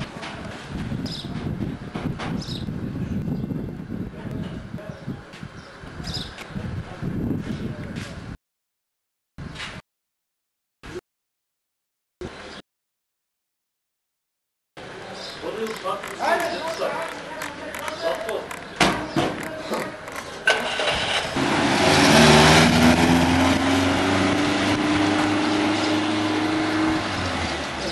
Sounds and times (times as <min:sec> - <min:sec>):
Car passing by: 0:20.5 - 0:27.9.